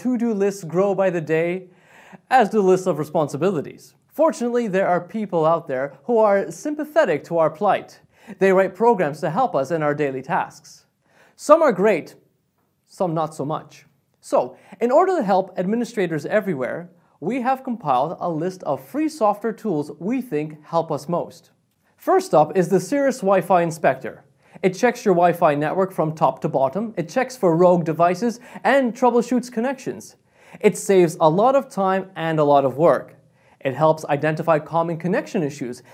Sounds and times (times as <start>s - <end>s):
Speech: 0.0s - 12.2s, 12.9s - 35.9s.